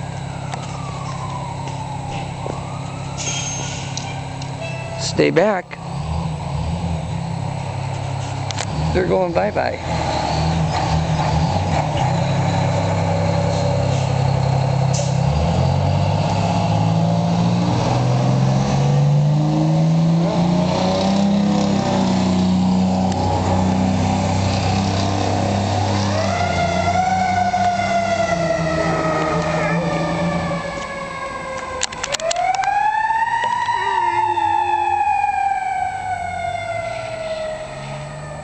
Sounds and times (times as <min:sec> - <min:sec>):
Fire engine, fire truck (siren): 0:00.0 - 0:38.4.